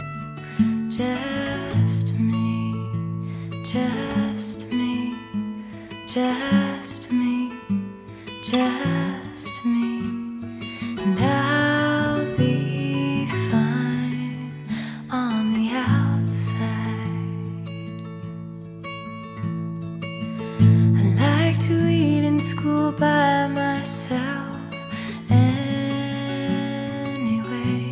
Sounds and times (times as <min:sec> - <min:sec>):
Music: 0:00.0 - 0:27.9.